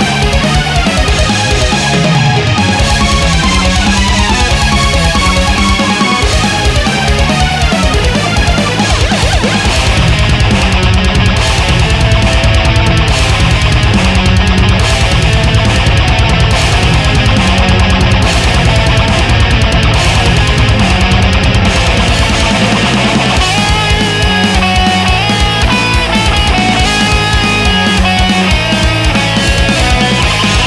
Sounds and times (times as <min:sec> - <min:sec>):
Video game music: 0:00.0 - 0:30.6.